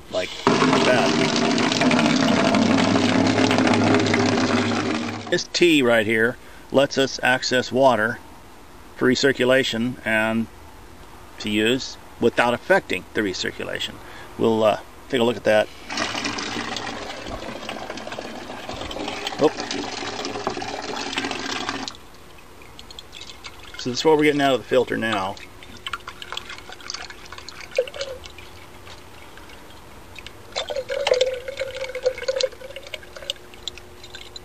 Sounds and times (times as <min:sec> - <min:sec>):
Water: 0:00.0 - 0:06.1, 0:11.5 - 0:34.4
Speech: 0:00.1 - 0:01.1, 0:05.3 - 0:08.2, 0:09.0 - 0:10.5, 0:11.4 - 0:15.7, 0:23.8 - 0:25.4.